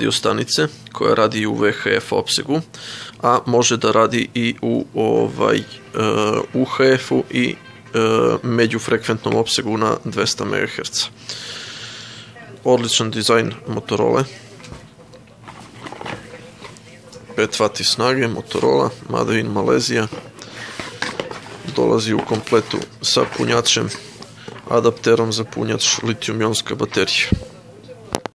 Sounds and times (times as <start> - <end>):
Speech: 0.0 - 11.2, 12.4 - 28.3.